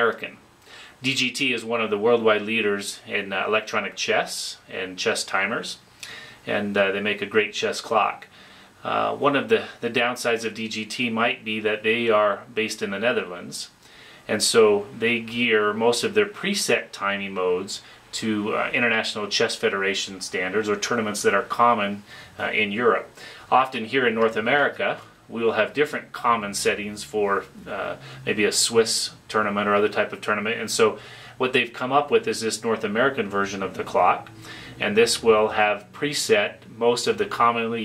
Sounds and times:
Speech: 0.0s - 5.8s, 6.4s - 37.8s.

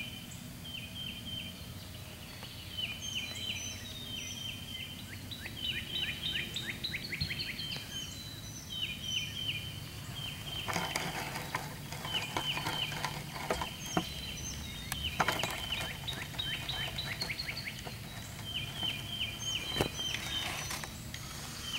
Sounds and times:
Bird: 0.0s - 21.7s.

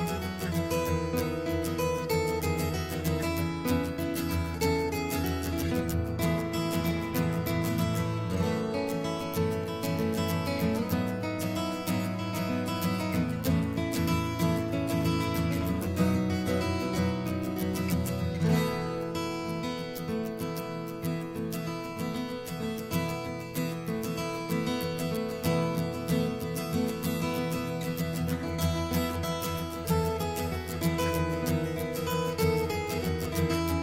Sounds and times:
Music: 0.0s - 33.8s.

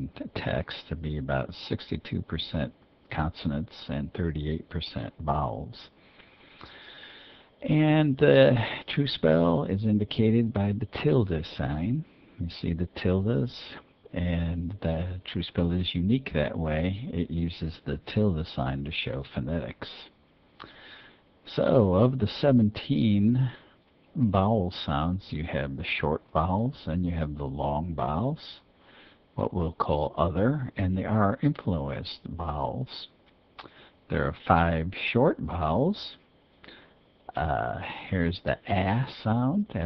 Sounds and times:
Speech: 0.0s - 6.0s, 7.6s - 20.2s, 21.5s - 28.7s, 29.4s - 33.2s, 34.1s - 36.3s, 37.3s - 39.8s.

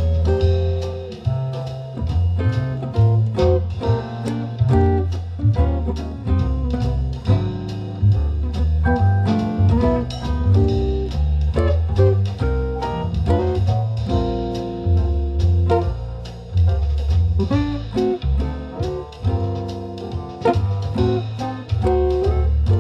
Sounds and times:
Acoustic guitar: 0.0s - 22.8s.

